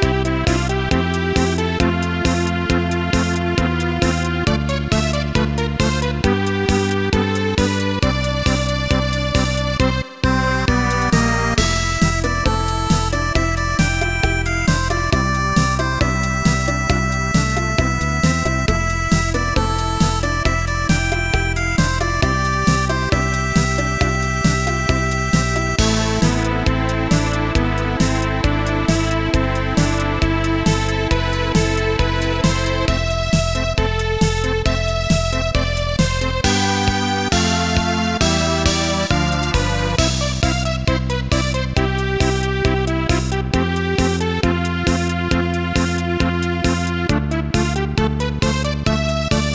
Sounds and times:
Music: 0:00.0 - 0:49.5.

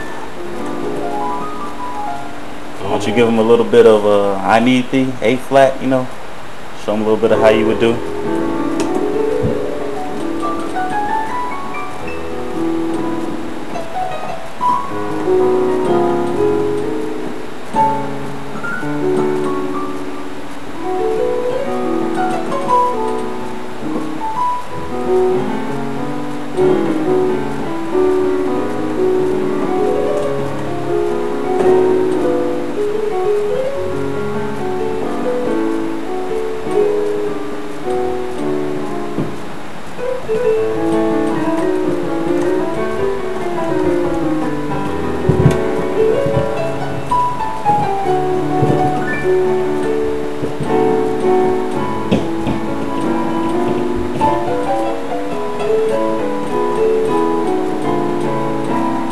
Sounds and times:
Rhythm and blues: 0:00.0 - 0:59.1
Gospel music: 0:06.8 - 0:59.1.

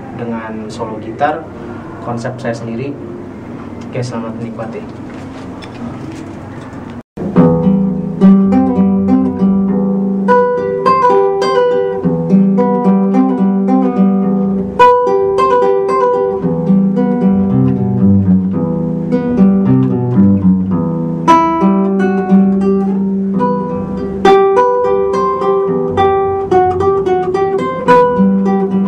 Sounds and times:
Speech: 0:00.2 - 0:03.0, 0:03.9 - 0:05.0
Music: 0:07.2 - 0:28.8.

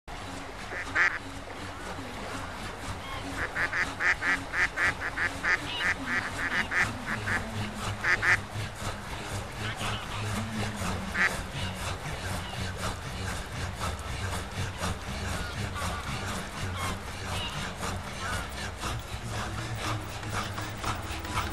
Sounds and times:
Honk: 0:00.7 - 0:01.2, 0:03.5 - 0:07.4, 0:08.0 - 0:08.4.

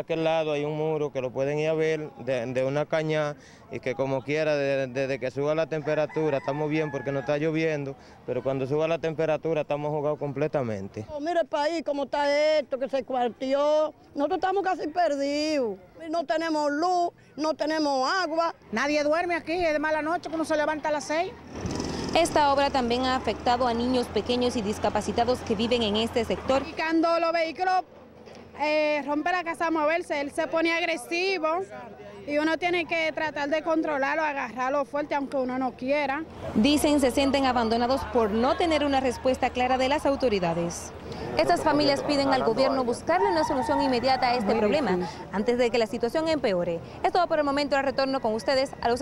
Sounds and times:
Vehicle: 0:00.0 - 0:49.0.

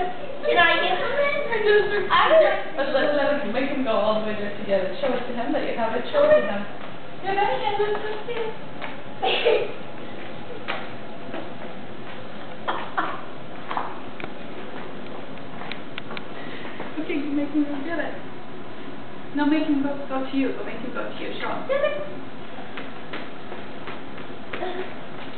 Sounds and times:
Speech: 0:00.0 - 0:08.6, 0:17.0 - 0:18.2, 0:19.4 - 0:22.2.

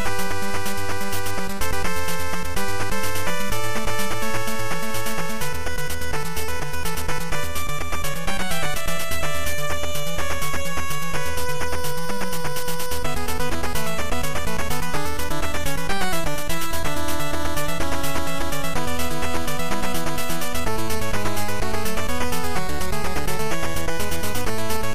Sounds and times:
Music: 0:00.0 - 0:24.9.

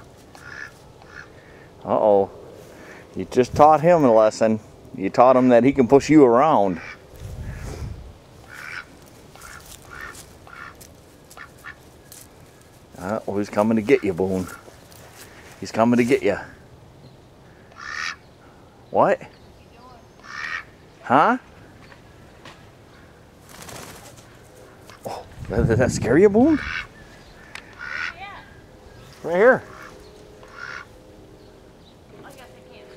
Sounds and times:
Honk: 0:00.4 - 0:01.3, 0:06.7 - 0:07.6, 0:08.5 - 0:11.8, 0:17.7 - 0:18.2, 0:20.2 - 0:20.7, 0:26.5 - 0:26.9, 0:27.5 - 0:28.2, 0:29.7 - 0:30.9.

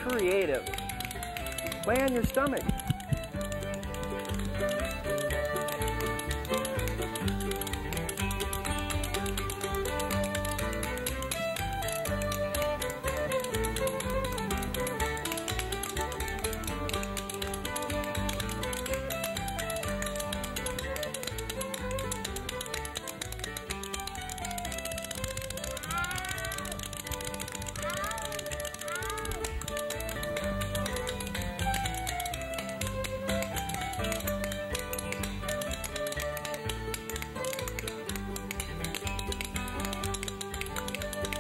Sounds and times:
Music: 0:00.0 - 0:41.4.

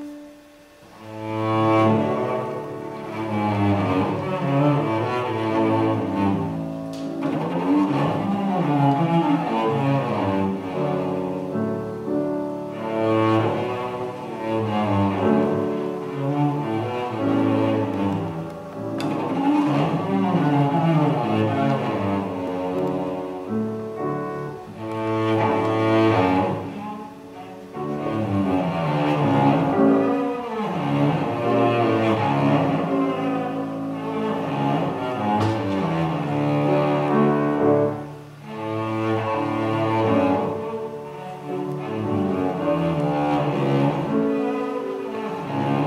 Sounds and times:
Cello: 0:00.0 - 0:45.8
Double bass: 0:00.0 - 0:45.8.

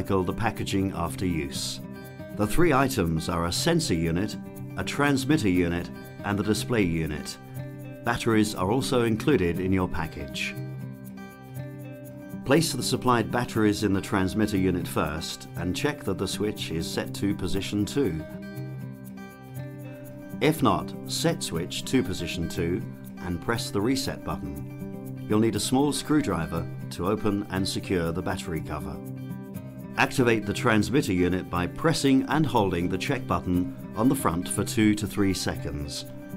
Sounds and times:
Speech: 0:00.0 - 0:07.4, 0:08.1 - 0:10.6, 0:12.5 - 0:18.3, 0:20.4 - 0:24.6, 0:25.3 - 0:29.0, 0:30.0 - 0:36.1
Music: 0:00.0 - 0:36.3.

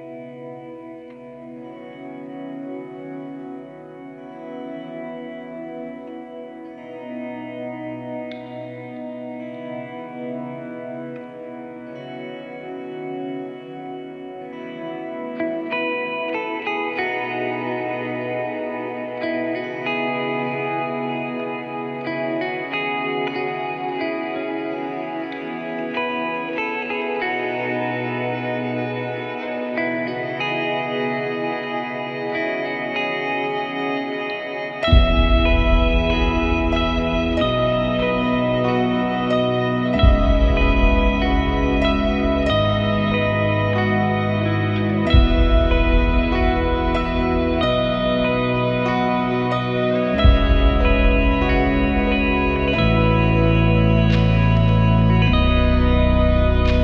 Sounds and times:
Music: 0:00.0 - 0:56.8.

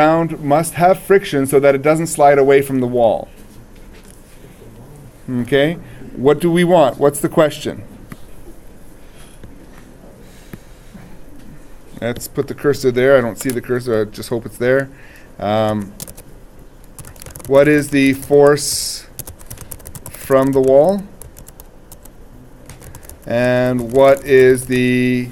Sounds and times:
Speech: 0:00.0 - 0:03.4, 0:04.5 - 0:07.9, 0:12.0 - 0:15.9, 0:17.5 - 0:19.2, 0:20.2 - 0:21.1, 0:23.3 - 0:25.3.

